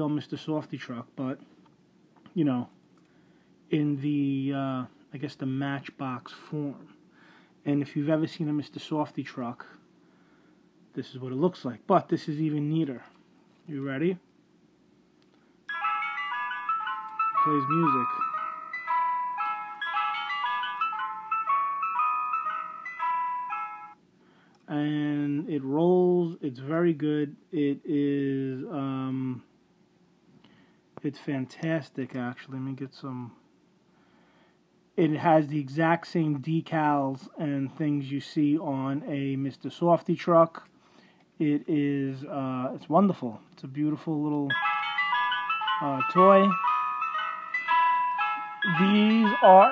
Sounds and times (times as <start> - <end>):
Speech: 0.0 - 1.4, 2.3 - 2.8, 3.7 - 6.9, 7.6 - 9.8, 11.0 - 14.3, 17.4 - 18.1, 24.7 - 29.5, 31.0 - 33.4, 35.0 - 40.7, 41.4 - 44.6, 45.8 - 46.6, 48.7 - 49.7.